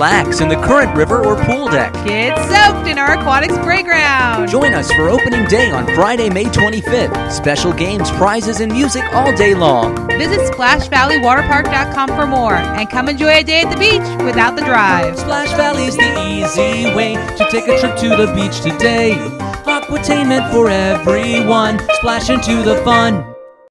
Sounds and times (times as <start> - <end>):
Speech: 0.0 - 16.3
Music: 0.0 - 23.7.